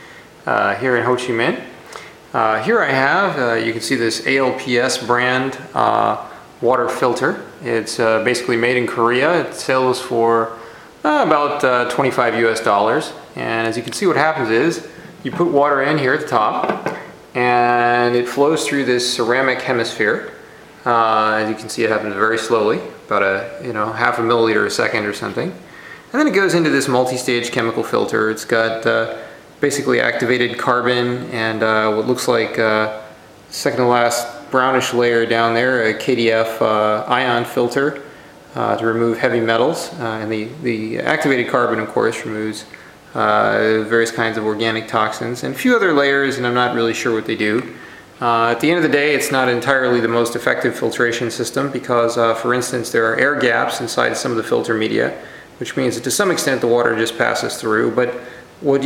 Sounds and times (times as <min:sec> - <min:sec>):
Speech: 0:00.0 - 0:58.8.